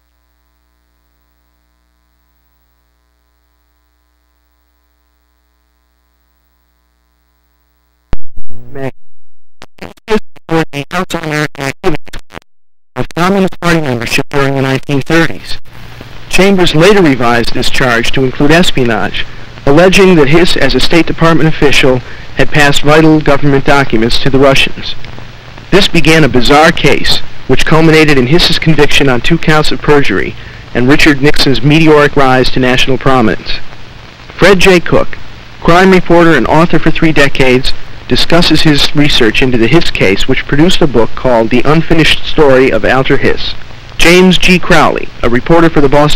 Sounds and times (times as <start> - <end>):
Speech: 8.6 - 8.9, 10.1 - 12.0, 13.0 - 15.7, 16.3 - 25.0, 25.7 - 33.7, 34.4 - 46.1.